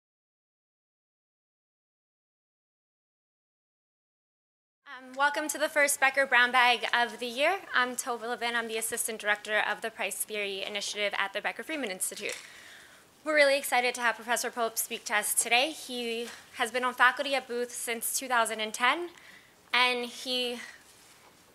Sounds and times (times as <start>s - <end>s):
Speech: 4.9s - 12.4s, 13.2s - 19.2s, 19.8s - 20.8s.